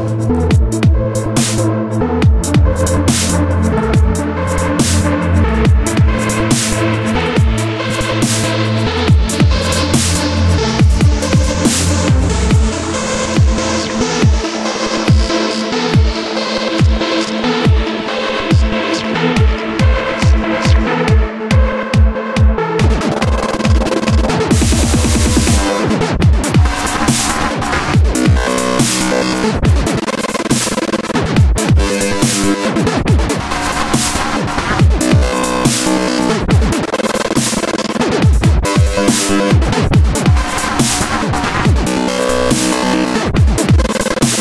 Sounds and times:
Dubstep: 0.0s - 44.4s.

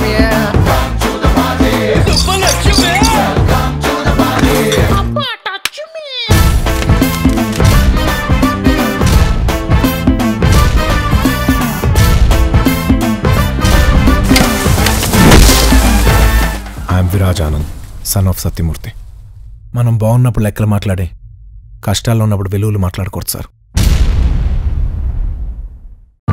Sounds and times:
Music: 0.0s - 5.4s, 6.3s - 17.2s
Speech: 19.8s - 21.2s, 21.8s - 23.5s.

